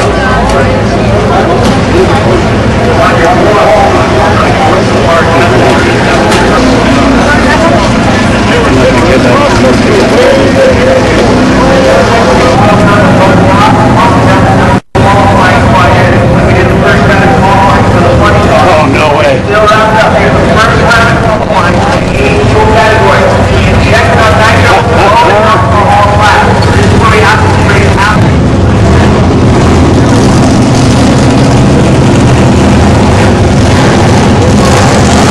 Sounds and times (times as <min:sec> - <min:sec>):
Speech: 0:00.0 - 0:28.4.